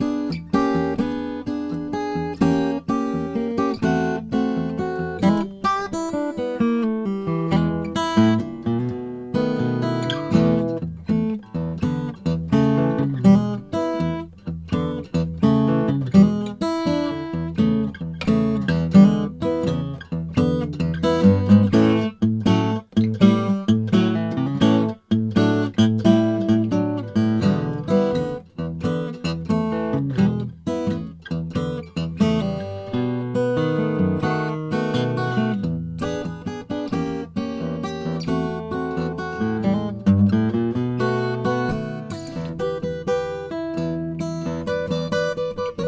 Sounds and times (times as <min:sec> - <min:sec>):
Acoustic guitar: 0:00.0 - 0:45.8.